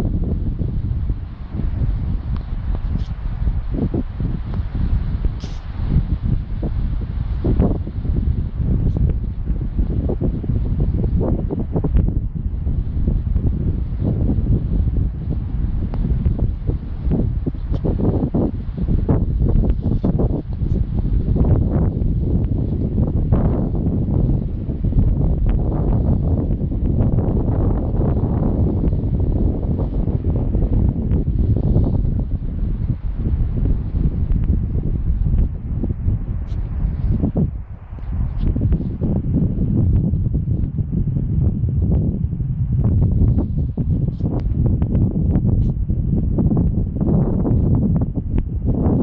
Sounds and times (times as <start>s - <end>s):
Wind noise (microphone): 0.0s - 49.0s.